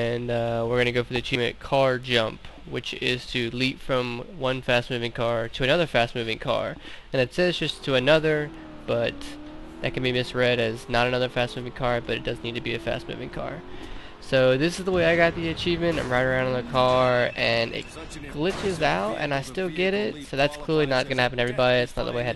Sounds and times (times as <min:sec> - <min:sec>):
Speech: 0:00.0 - 0:22.3
Car: 0:06.1 - 0:22.3.